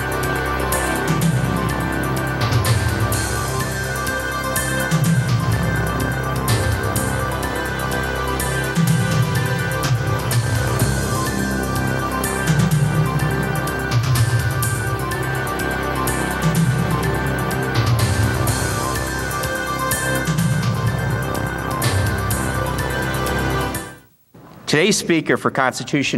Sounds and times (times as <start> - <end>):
Music: 0.0 - 24.1.